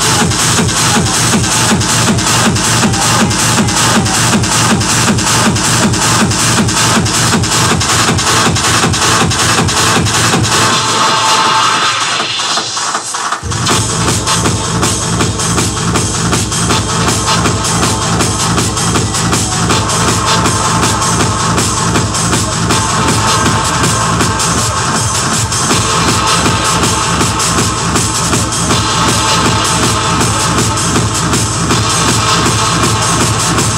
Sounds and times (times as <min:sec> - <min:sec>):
Techno: 0:00.0 - 0:33.7.